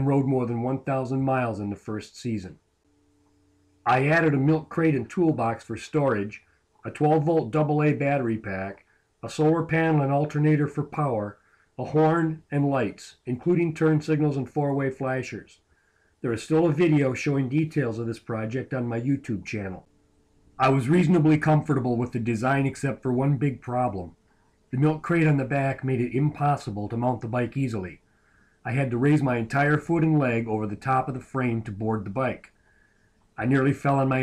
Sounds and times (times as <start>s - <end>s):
Speech: 0.0s - 2.6s, 3.9s - 15.6s, 16.2s - 19.9s, 20.6s - 24.2s, 24.8s - 28.0s, 28.7s - 32.6s, 33.4s - 34.2s.